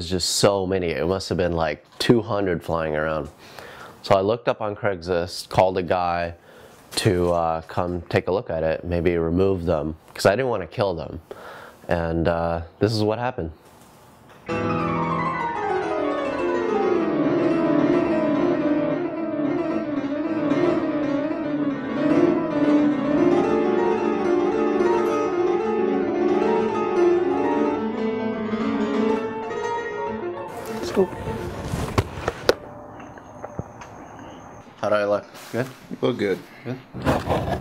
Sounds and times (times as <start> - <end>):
Music: 14.4 - 32.1.